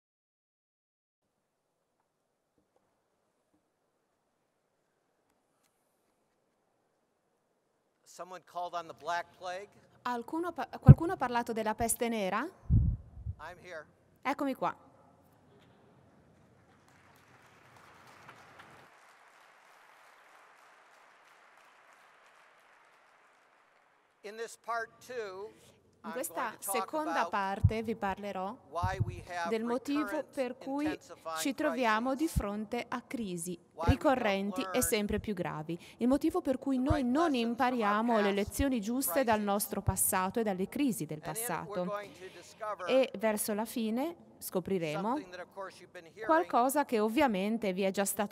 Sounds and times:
Speech: 8.1 - 12.5, 13.4 - 14.8, 24.3 - 48.3.

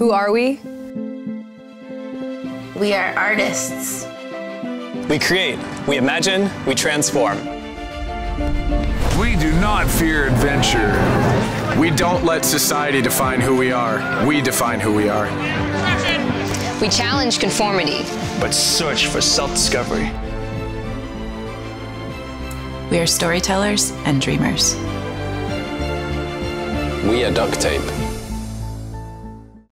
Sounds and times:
Music: 0.0 - 29.7.

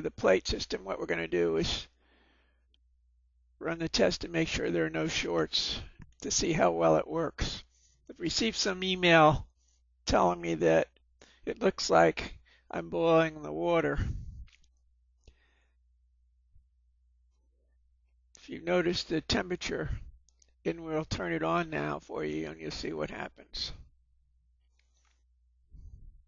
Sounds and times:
Speech: 0.0 - 2.0, 3.6 - 9.5, 10.1 - 14.2, 18.4 - 20.1, 20.7 - 23.9.

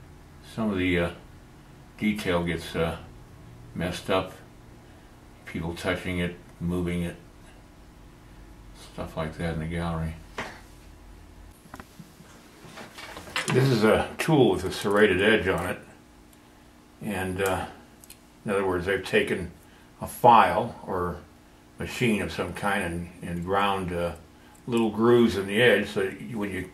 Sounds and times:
Inside, small room: 0.0 - 26.7
Speech: 0.4 - 1.2, 2.0 - 3.1, 3.8 - 4.5, 5.4 - 7.2, 8.8 - 10.2, 13.4 - 16.0, 17.0 - 17.8, 18.4 - 26.7.

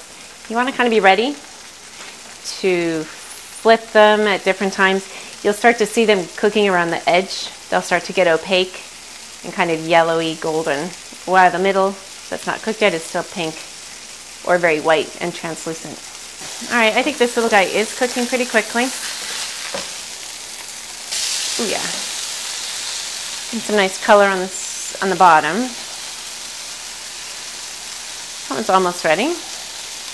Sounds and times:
Speech: 0.5 - 1.4, 2.5 - 8.8, 9.4 - 13.6, 14.5 - 16.0, 16.6 - 19.0, 21.6 - 22.1, 23.5 - 25.8, 28.5 - 29.4.

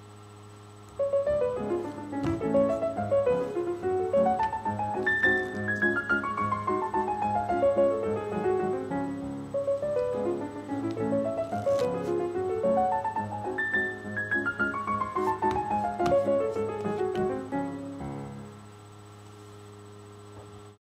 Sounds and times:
Music: 1.0 - 18.8.

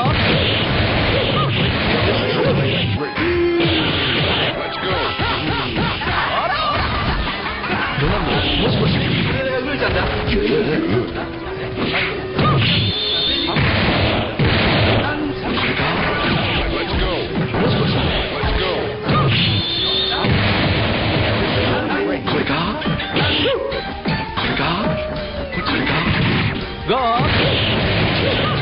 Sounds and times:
Music: 0.0 - 28.6.

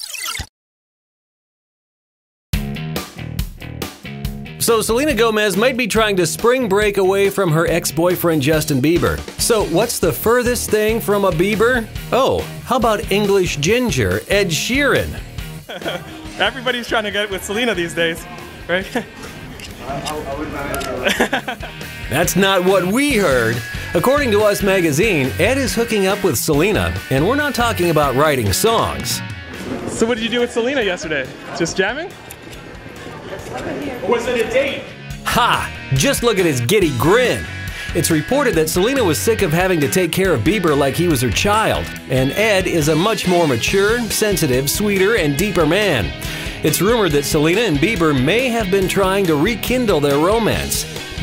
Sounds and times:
Music: 2.6 - 51.2
Speech: 4.6 - 15.2, 22.1 - 29.2, 33.4 - 50.8.

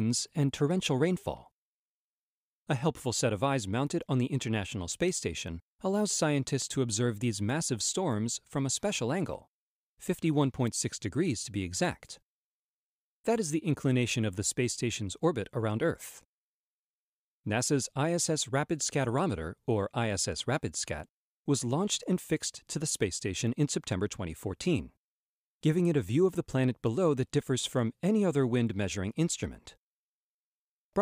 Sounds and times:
Speech: 0.0 - 1.5, 2.7 - 12.2, 13.3 - 16.2, 17.5 - 25.0, 25.6 - 29.8.

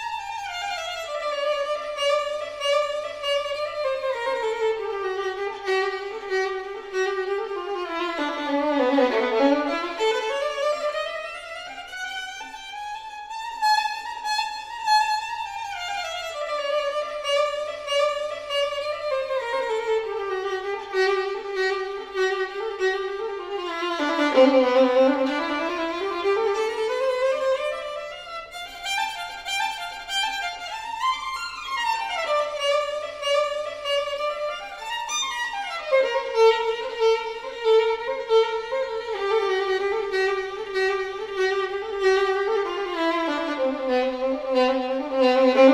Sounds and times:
Violin, fiddle: 0.0 - 45.7.

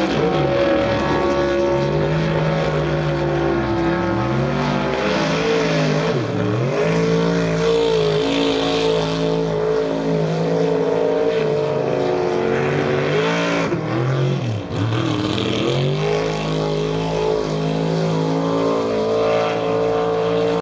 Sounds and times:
Motorboat, speedboat: 0.0 - 20.6.

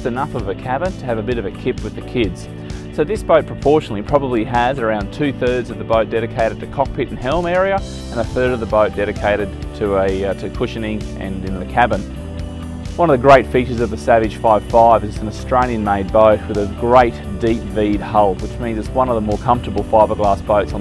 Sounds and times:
Speech: 0.0 - 2.4, 3.0 - 12.1, 13.0 - 20.8
Music: 0.0 - 20.8.

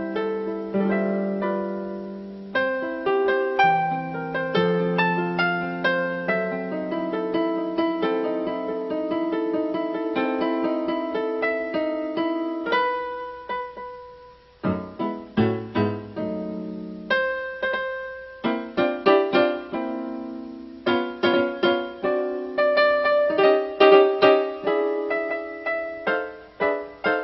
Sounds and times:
Music: 0.0 - 27.2.

